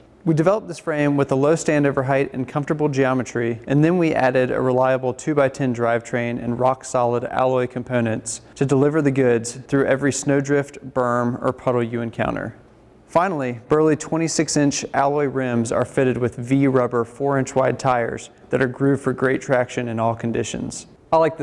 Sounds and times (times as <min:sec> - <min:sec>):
Speech: 0:00.2 - 0:21.4.